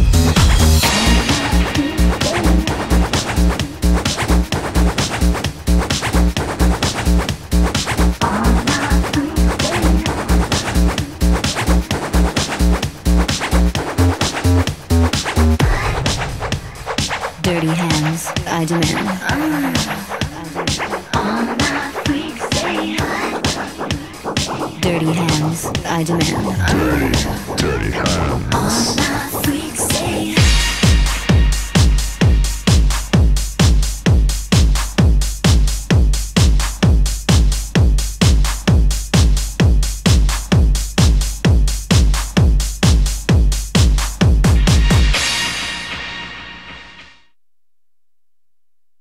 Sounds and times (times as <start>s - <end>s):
Dance music: 0.0s - 7.3s, 17.0s - 31.4s.